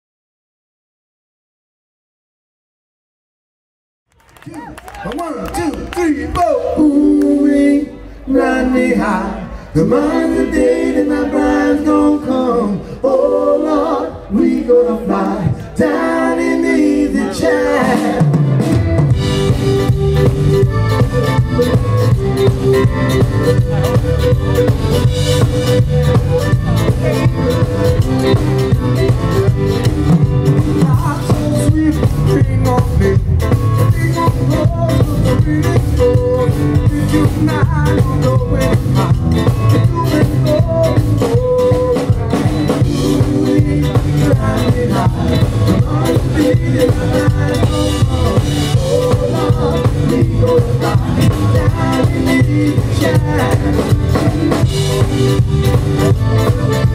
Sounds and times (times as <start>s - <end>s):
Speech: 4.5s - 6.9s
Singing: 6.0s - 18.6s, 30.7s - 55.4s.